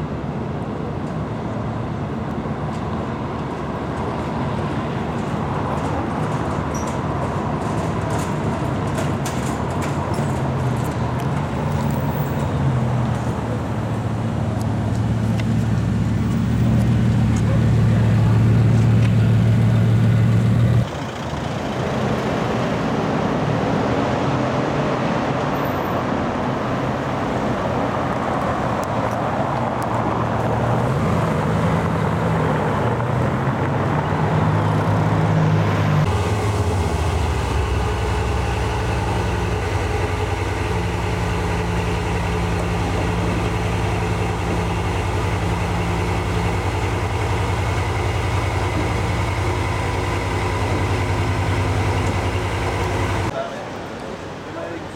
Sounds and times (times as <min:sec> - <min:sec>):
Outside, urban or manmade: 0:00.0 - 0:54.9
Vehicle: 0:00.0 - 0:54.9.